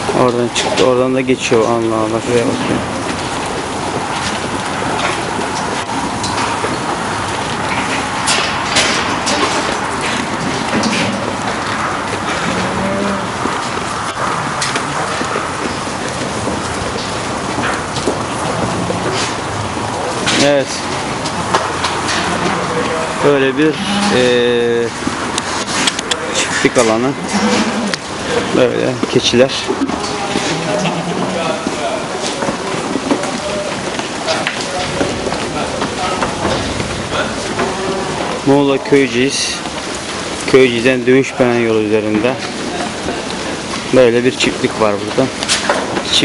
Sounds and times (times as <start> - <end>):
Speech: 0.1 - 2.7, 20.1 - 20.9, 22.6 - 25.0, 26.0 - 27.2, 28.3 - 32.4, 38.4 - 39.7, 40.5 - 43.3, 43.9 - 45.4.